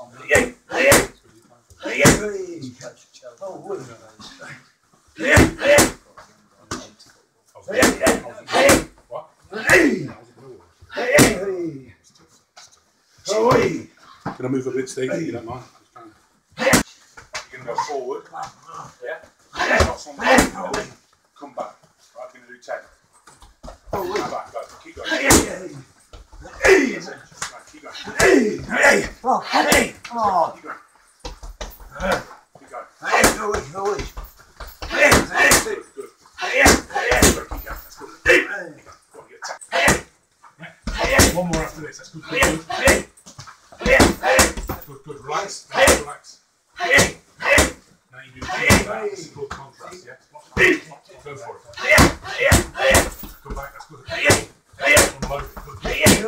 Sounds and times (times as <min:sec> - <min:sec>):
Inside, small room: 0:00.0 - 0:56.2.